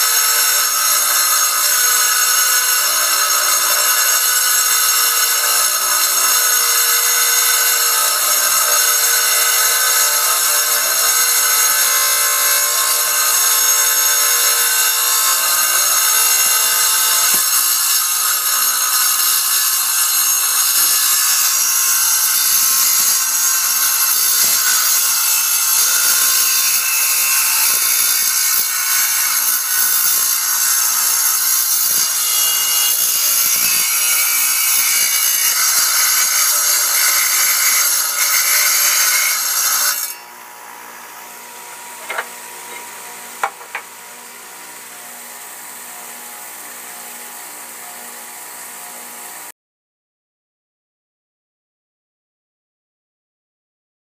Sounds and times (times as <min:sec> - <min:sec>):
Tools: 0:00.0 - 0:40.3, 0:42.0 - 0:44.0.